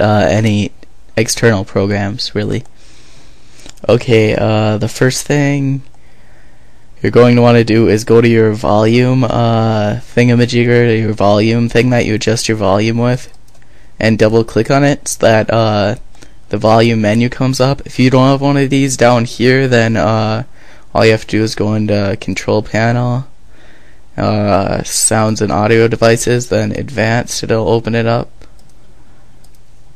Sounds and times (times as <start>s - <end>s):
Speech: 0.0s - 2.7s, 3.8s - 5.9s, 7.0s - 13.4s, 14.0s - 23.3s, 24.2s - 28.5s.